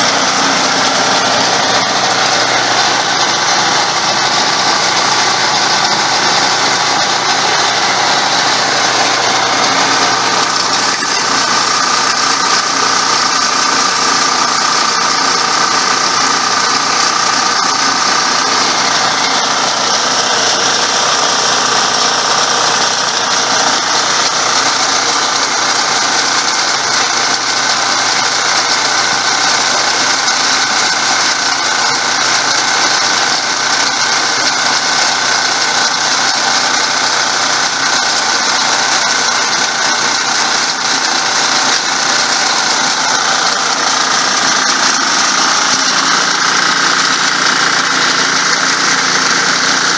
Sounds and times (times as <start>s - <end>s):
Idling: 0.0s - 49.9s
Outside, rural or natural: 0.0s - 49.9s.